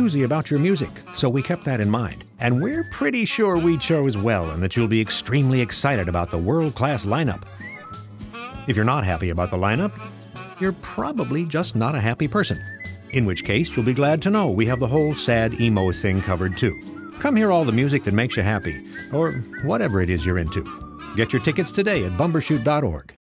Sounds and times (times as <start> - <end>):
Speech: 0.0 - 7.4, 8.7 - 10.0, 10.6 - 12.6, 13.2 - 23.2
Music: 0.0 - 23.2.